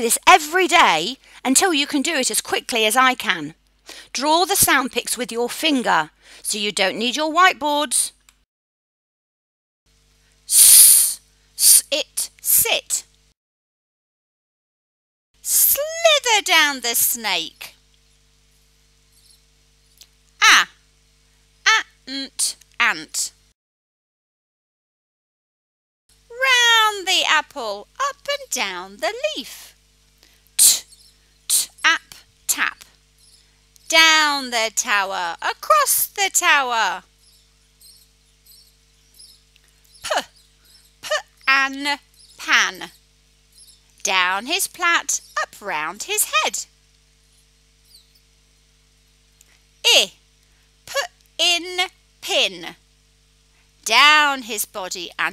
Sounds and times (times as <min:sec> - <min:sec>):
Speech: 0:00.0 - 0:08.2, 0:10.5 - 0:13.1, 0:15.5 - 0:17.8, 0:20.4 - 0:20.7, 0:21.7 - 0:23.4, 0:26.3 - 0:29.7, 0:30.6 - 0:30.8, 0:31.5 - 0:32.9, 0:33.9 - 0:37.0, 0:40.1 - 0:40.3, 0:41.0 - 0:43.0, 0:44.0 - 0:46.7, 0:49.9 - 0:50.2, 0:50.9 - 0:52.8, 0:53.8 - 0:55.3.